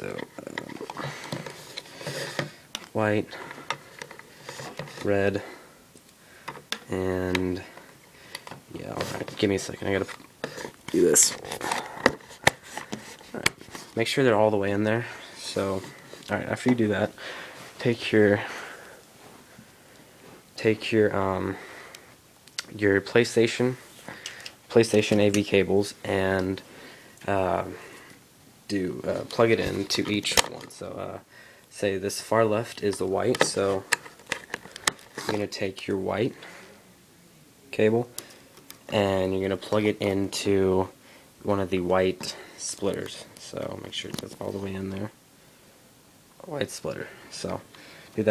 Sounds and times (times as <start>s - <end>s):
Inside, small room: 0.0s - 48.3s
Speech: 3.0s - 3.4s, 5.0s - 5.5s, 6.9s - 7.7s, 8.7s - 10.1s, 10.9s - 11.5s, 14.0s - 17.2s, 17.8s - 18.5s, 20.6s - 21.6s, 22.6s - 23.8s, 24.7s - 26.6s, 27.2s - 27.8s, 28.7s - 33.9s, 35.2s - 36.4s, 37.7s - 38.1s, 38.9s - 45.2s, 46.4s - 47.6s.